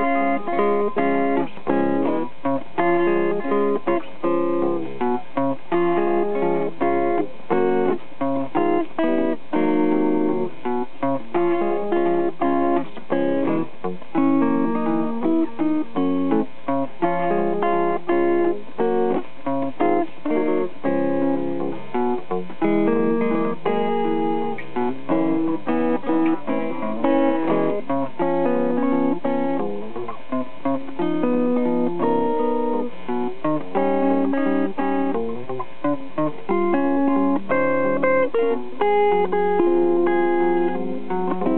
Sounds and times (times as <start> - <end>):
Electric guitar: 0.0 - 41.5
Strum: 0.0 - 41.5.